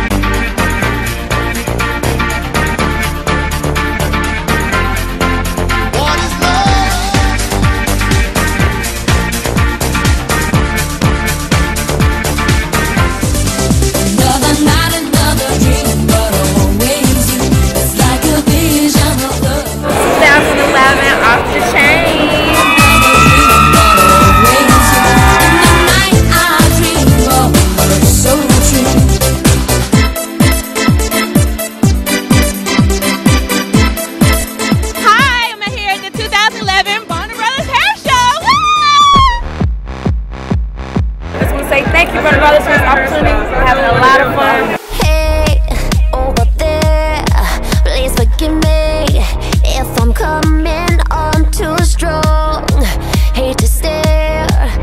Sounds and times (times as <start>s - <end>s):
Music of Asia: 22.7s - 37.8s.